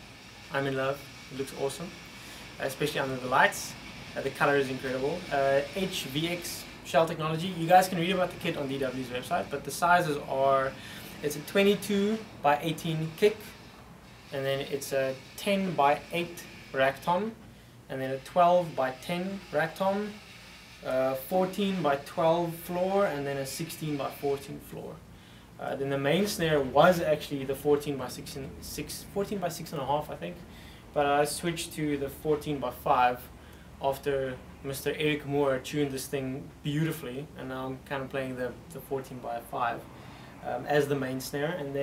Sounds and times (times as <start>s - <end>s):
Speech: 0.5s - 2.0s, 2.6s - 13.6s, 14.3s - 20.2s, 20.8s - 25.0s, 25.6s - 41.8s.